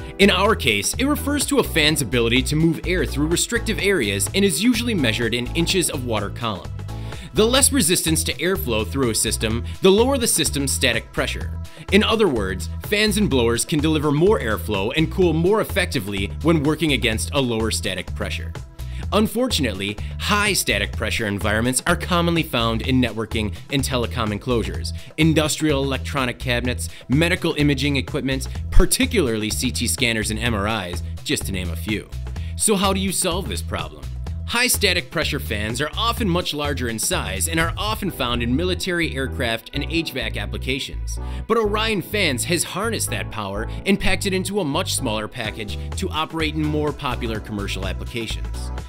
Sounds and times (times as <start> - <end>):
Music: 0.0 - 48.8
Speech: 0.2 - 6.7, 7.4 - 18.5, 19.1 - 48.7.